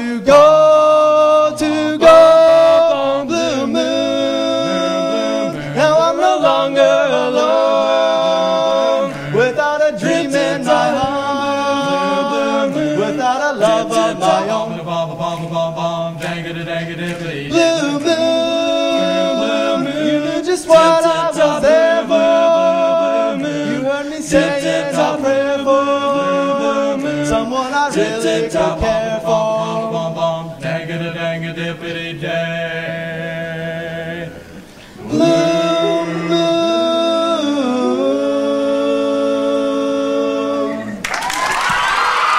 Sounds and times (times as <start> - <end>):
A capella: 0.0 - 42.3
Singing: 0.0 - 42.3.